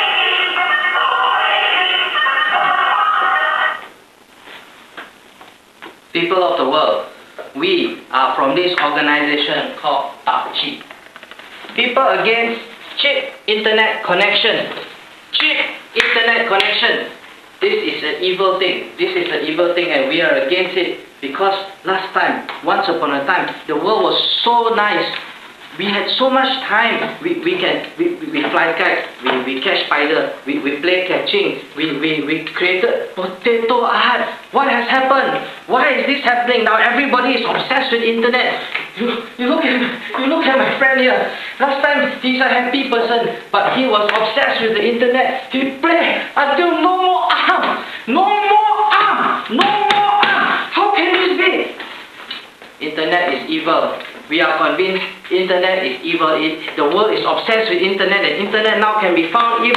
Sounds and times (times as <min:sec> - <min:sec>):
Narration, monologue: 0:04.9 - 0:59.7
Male speech, man speaking: 0:06.1 - 0:10.9, 0:11.7 - 0:51.8, 0:52.8 - 0:59.7.